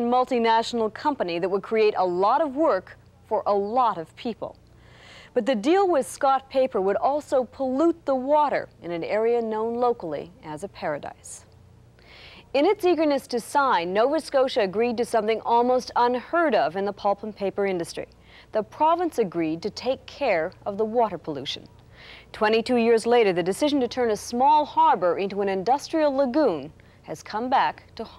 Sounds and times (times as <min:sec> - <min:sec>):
Speech: 0:00.0 - 0:04.6, 0:05.4 - 0:11.5, 0:12.6 - 0:21.7, 0:22.4 - 0:28.1.